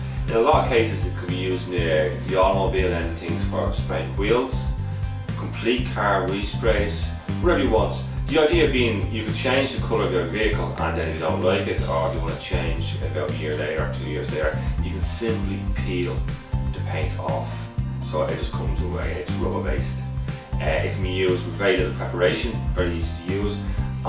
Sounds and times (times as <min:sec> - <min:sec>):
Music: 0:00.0 - 0:24.0
Speech: 0:00.3 - 0:24.0.